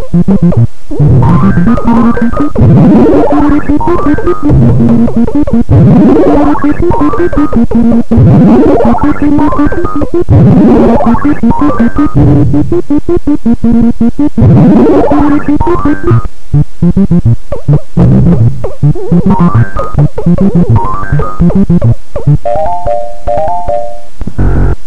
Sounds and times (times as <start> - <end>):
Video game music: 0.0 - 24.8.